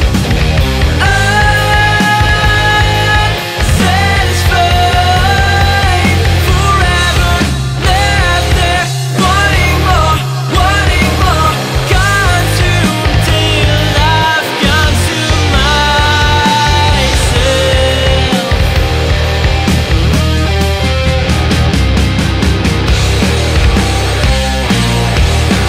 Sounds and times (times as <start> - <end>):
Grunge: 0.0 - 25.6.